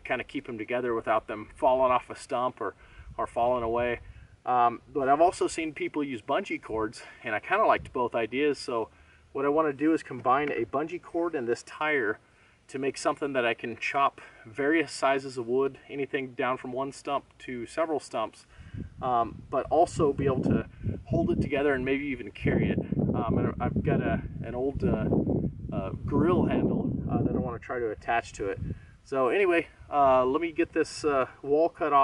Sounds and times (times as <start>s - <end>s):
Speech: 0.0s - 32.0s.